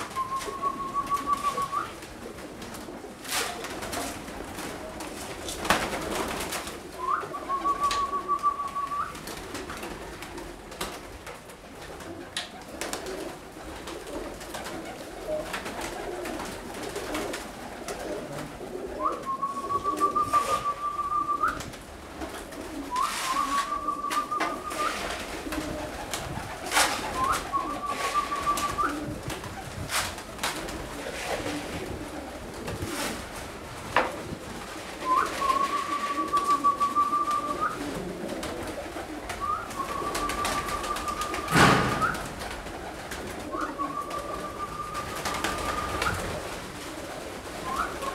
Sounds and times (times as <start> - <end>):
Coo: 0.0 - 10.9, 11.8 - 33.4, 34.0 - 48.1.